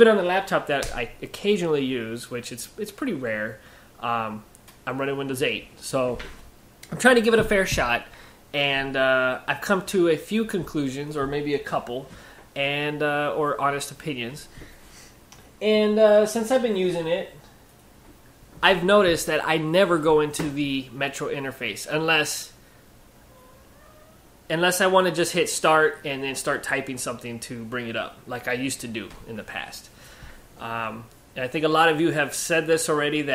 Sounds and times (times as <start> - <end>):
Speech: 0.0 - 6.3, 6.9 - 14.5, 15.6 - 17.4, 18.6 - 22.6, 24.5 - 29.9, 30.6 - 33.3.